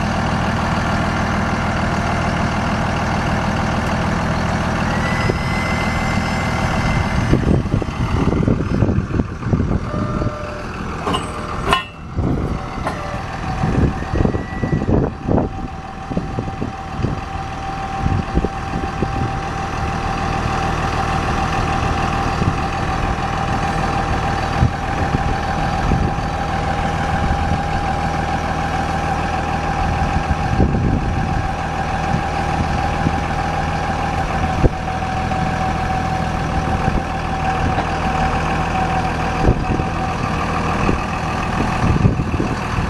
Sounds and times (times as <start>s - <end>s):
Vehicle: 0.0s - 42.9s.